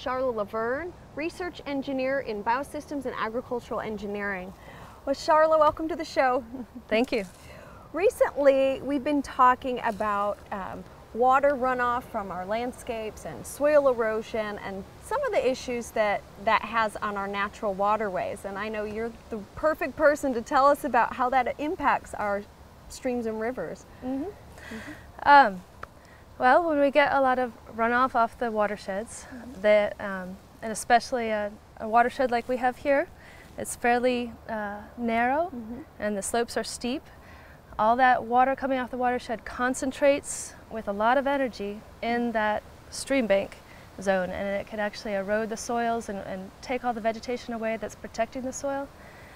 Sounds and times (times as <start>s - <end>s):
Speech: 8.0s - 25.6s, 26.4s - 37.0s.